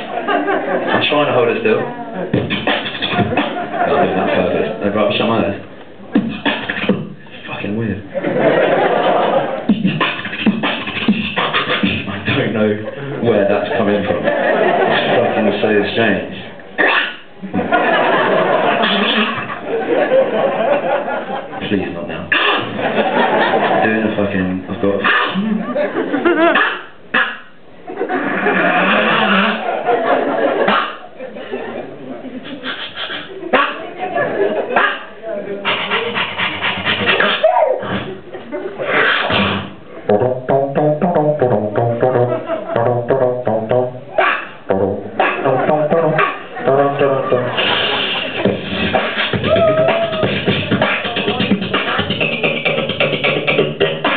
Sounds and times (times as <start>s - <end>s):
Speech: 1.0s - 2.2s, 3.9s - 5.7s, 7.5s - 8.1s, 12.3s - 14.3s, 14.9s - 16.6s, 21.6s - 22.4s, 23.8s - 25.1s, 33.6s - 36.3s
Beatboxing: 2.3s - 3.8s, 6.1s - 7.8s, 9.6s - 12.6s, 16.8s - 17.7s, 18.6s - 19.7s, 22.2s - 22.9s, 24.9s - 25.6s, 26.2s - 27.6s, 28.3s - 29.7s, 30.6s - 31.1s, 32.4s - 33.9s, 34.7s - 54.1s.